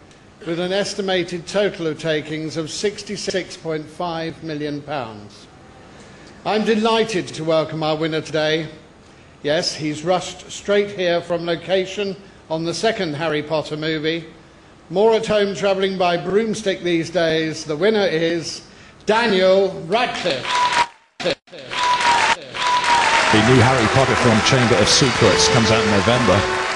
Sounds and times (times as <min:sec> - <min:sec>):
Male speech, man speaking: 0:00.4 - 0:05.5, 0:06.4 - 0:08.8, 0:09.4 - 0:14.3, 0:14.9 - 0:20.5, 0:23.3 - 0:26.5.